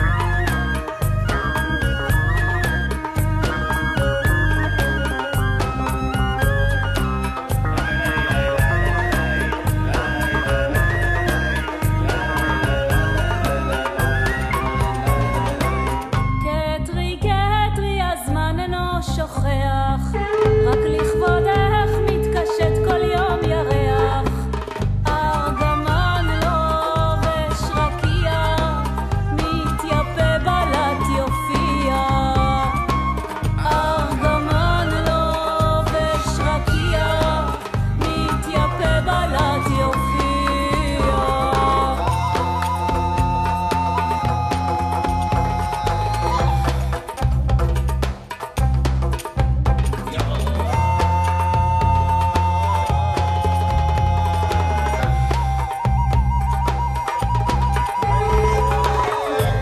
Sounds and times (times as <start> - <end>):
Middle Eastern music: 0.0 - 59.6.